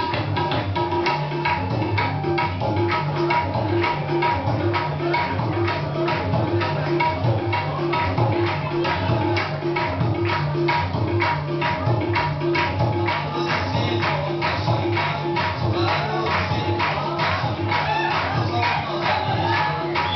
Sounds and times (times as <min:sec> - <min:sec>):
Dance music: 0:00.0 - 0:20.1.